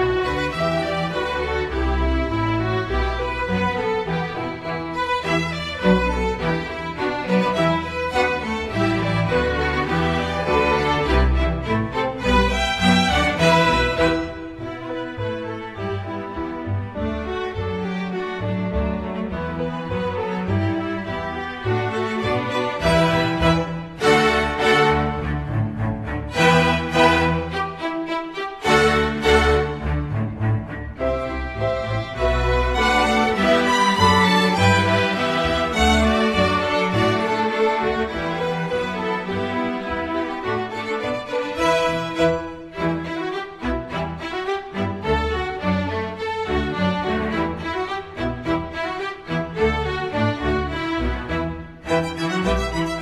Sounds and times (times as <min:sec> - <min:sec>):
Violin, fiddle: 0:00.0 - 0:53.0.